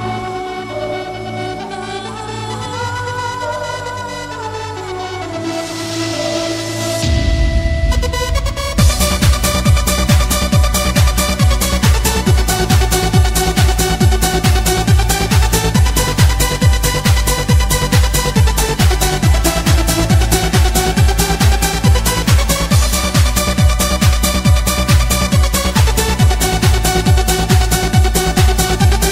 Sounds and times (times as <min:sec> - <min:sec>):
Techno: 0:00.0 - 0:29.1.